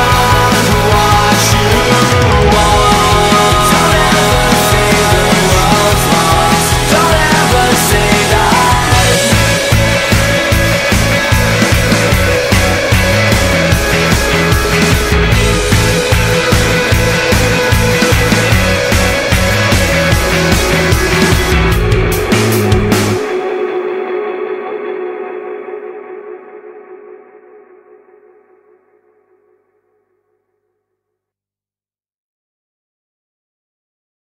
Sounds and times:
Music: 0:00.0 - 0:31.3.

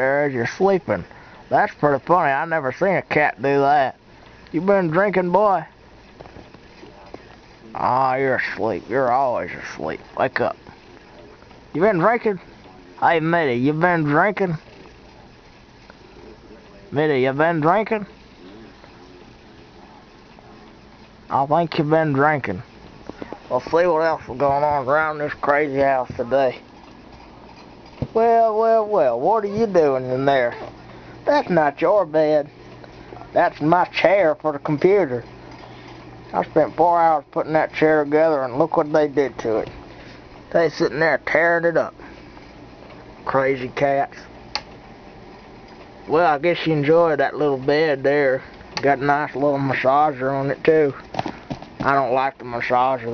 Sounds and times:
Speech: 0:00.0 - 0:05.8, 0:06.8 - 0:15.2, 0:16.2 - 0:20.7, 0:21.3 - 0:22.7, 0:23.5 - 0:26.6, 0:28.0 - 0:32.5, 0:33.3 - 0:35.3, 0:36.3 - 0:39.8, 0:40.5 - 0:42.0, 0:43.2 - 0:44.3, 0:46.1 - 0:51.0, 0:51.8 - 0:53.1.

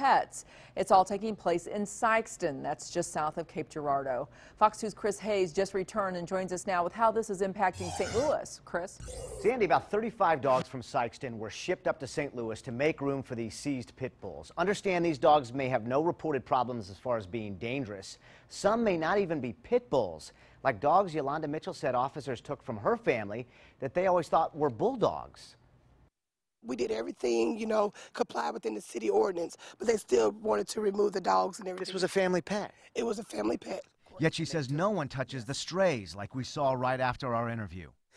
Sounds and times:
Speech: 0:26.7 - 0:38.0.

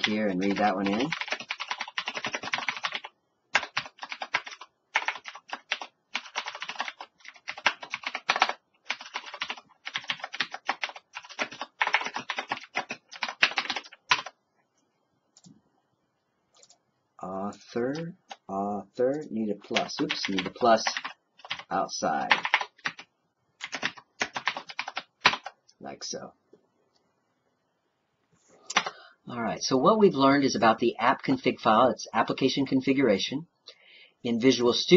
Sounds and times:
Computer keyboard: 0:00.0 - 0:14.4, 0:16.5 - 0:16.8, 0:19.1 - 0:21.7, 0:22.3 - 0:25.6, 0:28.7 - 0:29.0.

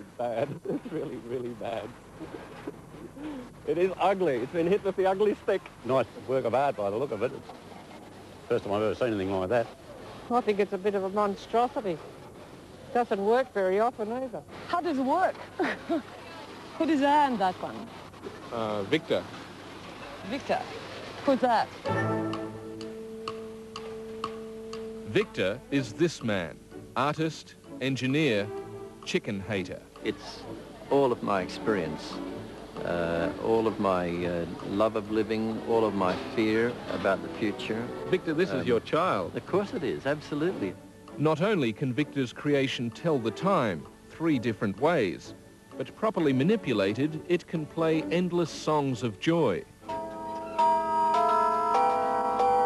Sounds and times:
Music: 0:21.7 - 0:52.6
Speech: 0:29.1 - 0:32.2.

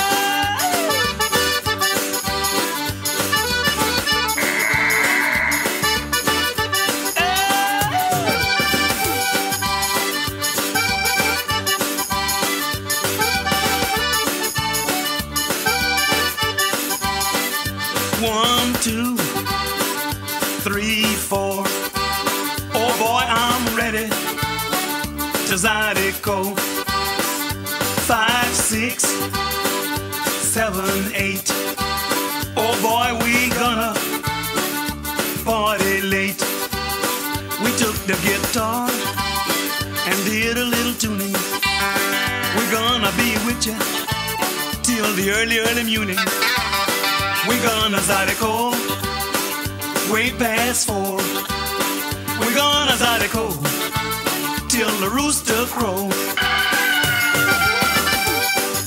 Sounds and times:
Music: 0:00.0 - 0:58.8.

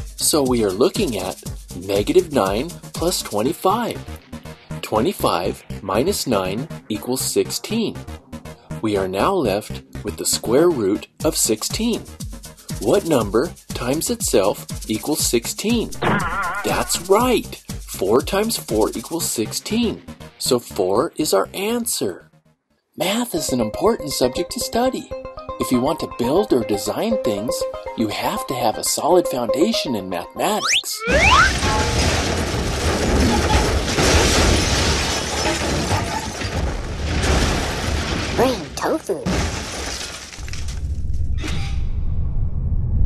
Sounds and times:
Speech: 0:00.2 - 0:04.1, 0:04.8 - 0:08.0, 0:08.8 - 0:12.1, 0:12.8 - 0:22.2, 0:23.0 - 0:31.0, 0:38.4 - 0:39.3.

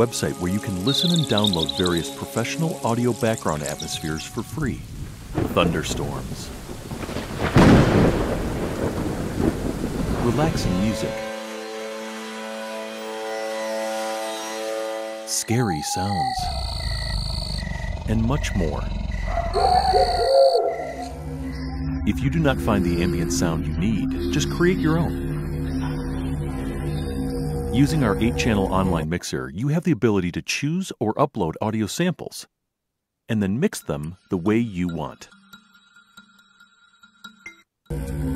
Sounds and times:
Music: 0:00.0 - 0:04.8, 0:10.2 - 0:16.1, 0:20.8 - 0:29.0, 0:37.2 - 0:38.3
Speech: 0:00.0 - 0:04.8, 0:05.5 - 0:06.5, 0:10.2 - 0:11.2, 0:15.3 - 0:16.5, 0:18.1 - 0:19.0, 0:22.1 - 0:25.2, 0:27.8 - 0:32.5, 0:33.3 - 0:35.3
Thunderstorm: 0:04.8 - 0:11.3.

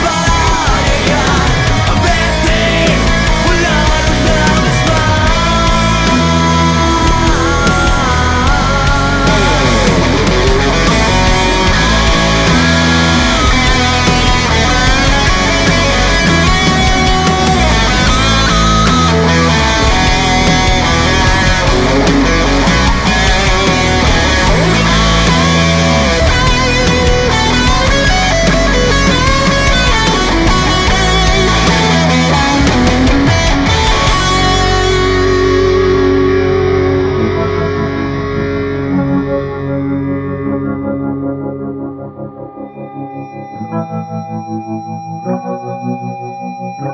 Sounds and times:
Rock music: 0:00.0 - 0:46.9.

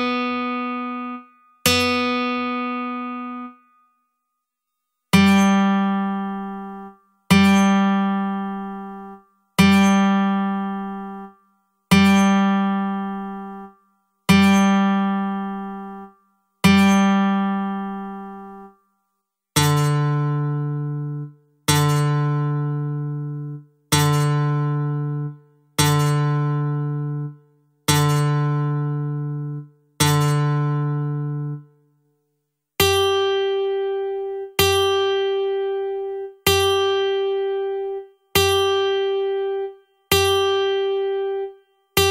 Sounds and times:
Music: 0:00.0 - 0:42.1.

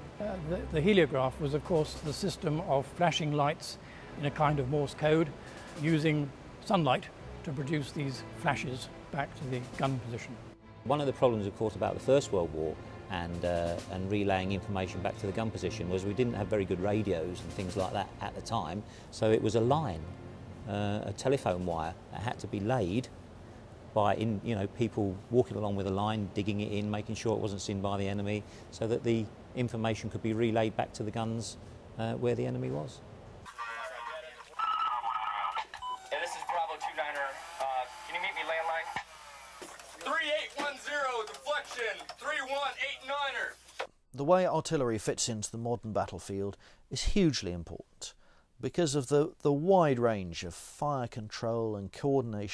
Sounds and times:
Music: 0:00.0 - 0:21.7
Speech: 0:00.2 - 0:20.1, 0:20.7 - 0:23.1, 0:24.0 - 0:33.0, 0:33.6 - 0:39.0, 0:40.0 - 0:43.6, 0:44.2 - 0:52.5.

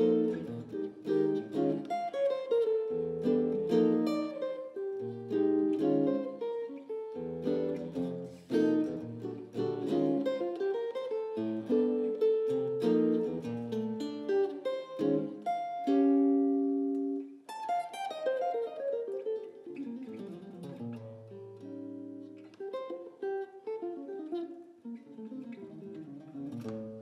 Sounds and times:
Guitar: 0:00.0 - 0:27.0.

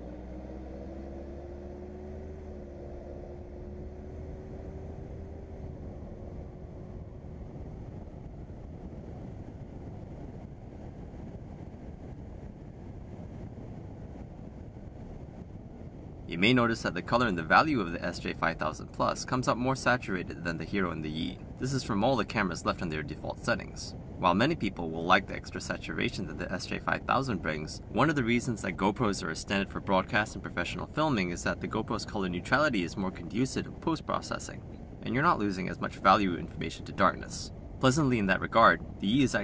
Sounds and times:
Speech: 0:16.3 - 0:39.4.

